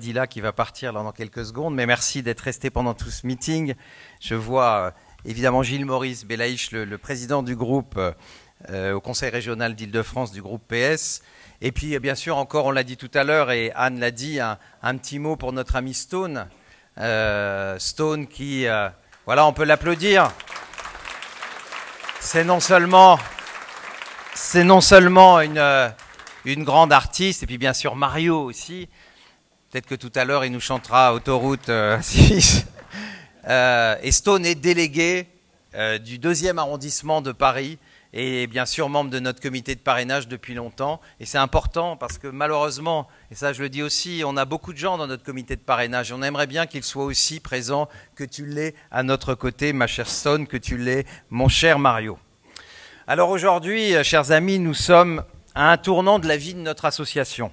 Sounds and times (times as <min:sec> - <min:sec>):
Speech: 0:00.0 - 0:20.4, 0:22.2 - 0:23.3, 0:24.4 - 0:28.9, 0:29.7 - 0:32.8, 0:33.4 - 0:52.2, 0:53.1 - 0:57.5.